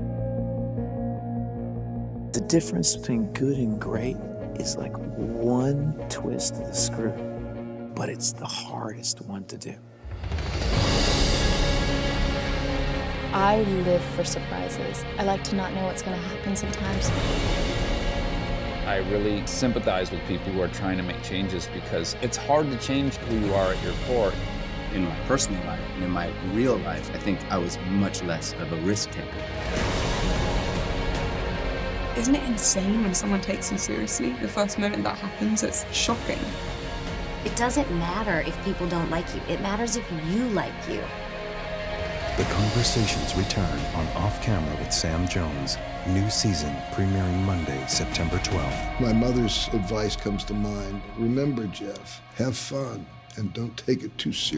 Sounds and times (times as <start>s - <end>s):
Music: 0.0s - 54.5s
Speech: 2.4s - 7.2s, 8.0s - 9.8s, 13.4s - 17.1s, 18.9s - 24.4s, 25.0s - 29.4s, 42.4s - 54.5s.